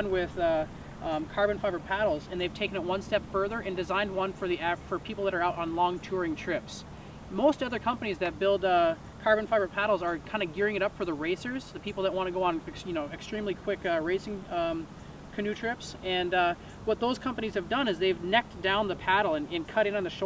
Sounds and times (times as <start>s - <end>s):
Speech: 0.0s - 20.2s.